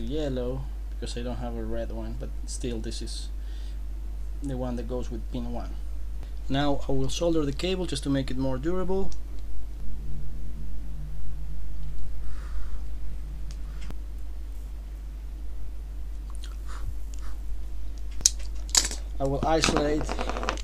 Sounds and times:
Speech: 0.0 - 3.4, 4.4 - 5.8, 6.5 - 9.2, 19.2 - 20.2
Inside, small room: 0.0 - 20.6.

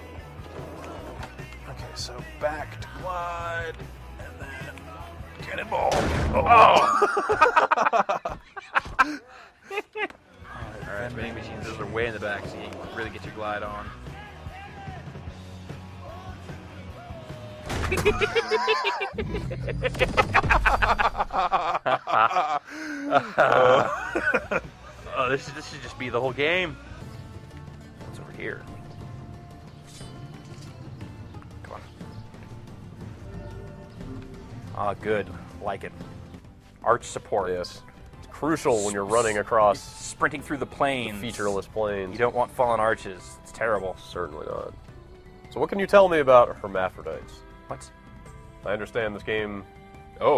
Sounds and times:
Music: 0.0 - 50.3.

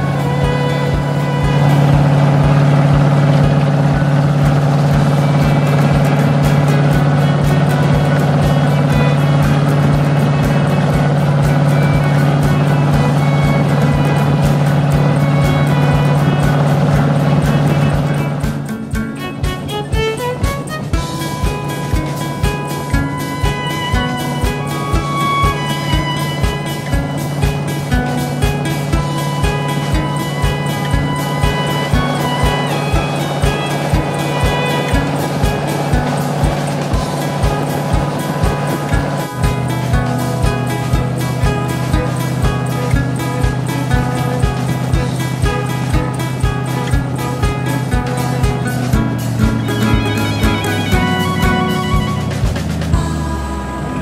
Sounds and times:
Motorboat, speedboat: 0.0 - 54.0
Music: 0.0 - 54.0.

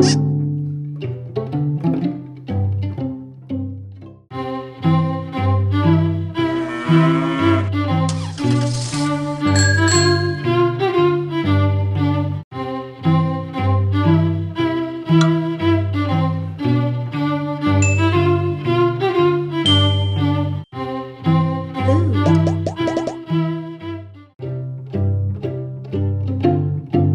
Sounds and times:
Music: 0.0 - 27.1
Animal: 6.4 - 7.7.

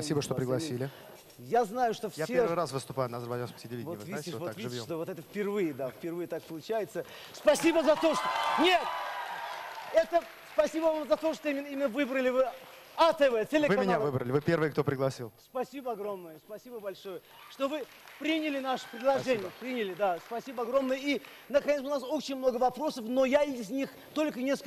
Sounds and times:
Speech: 0.0 - 8.9.

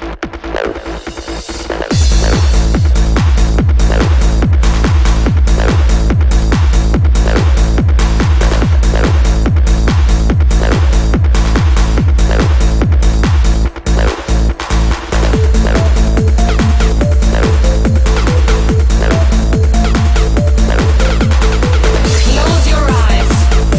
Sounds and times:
Trance music: 0.0 - 23.7.

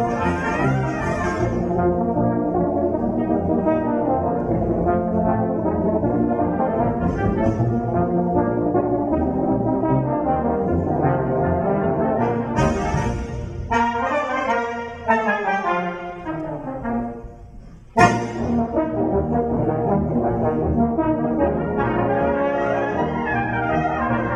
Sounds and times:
Inside, large room or hall: 0.0 - 24.3
Orchestra: 0.0 - 24.3
Trumpet: 0.0 - 24.3.

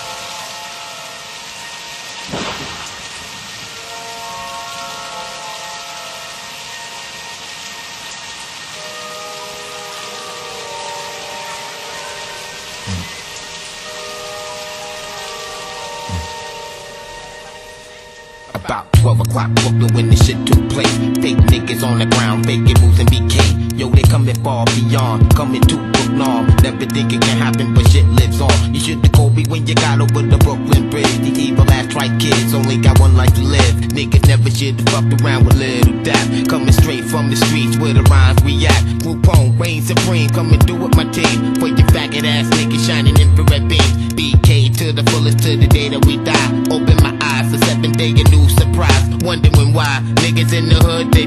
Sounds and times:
Music: 0.0 - 51.2.

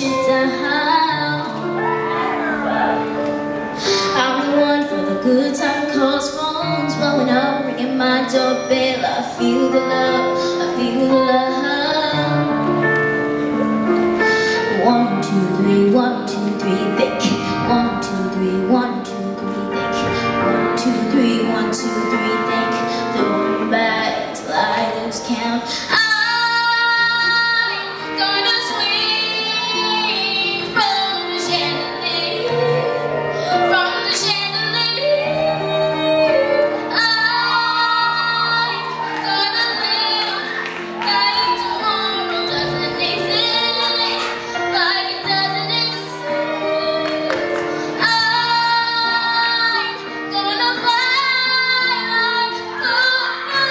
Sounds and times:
Female singing: 0.0 - 1.6, 4.2 - 12.5, 14.6 - 19.4, 20.0 - 53.7
Child singing: 0.0 - 2.7, 4.2 - 12.5, 20.0 - 53.7
Music: 0.0 - 53.7.

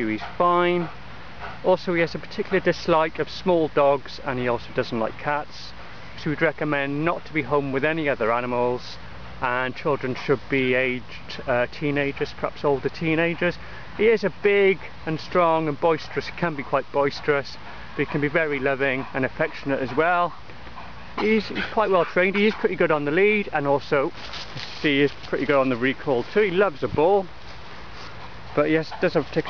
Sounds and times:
Speech: 0.0 - 1.0, 1.6 - 20.4, 21.2 - 24.2, 24.8 - 27.3, 28.6 - 29.4.

